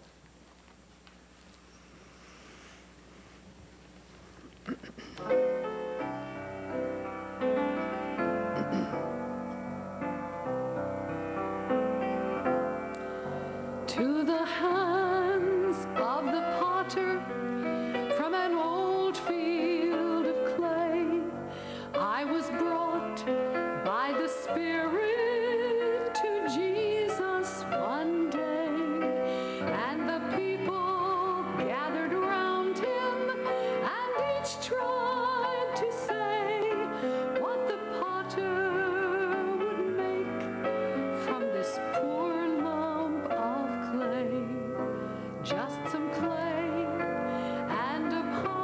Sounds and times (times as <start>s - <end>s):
Music: 5.2s - 48.6s.